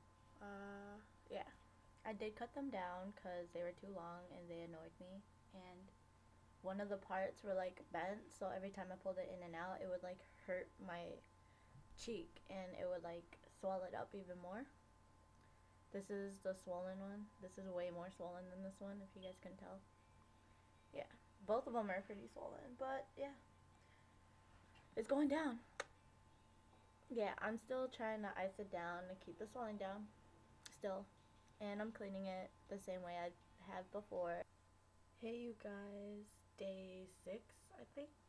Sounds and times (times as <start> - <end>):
Child speech, kid speaking: 0.4 - 5.9, 6.6 - 11.2, 12.0 - 14.7, 16.0 - 19.8, 21.0 - 23.4, 25.0 - 25.6, 27.1 - 30.1, 30.7 - 34.4, 35.2 - 38.2.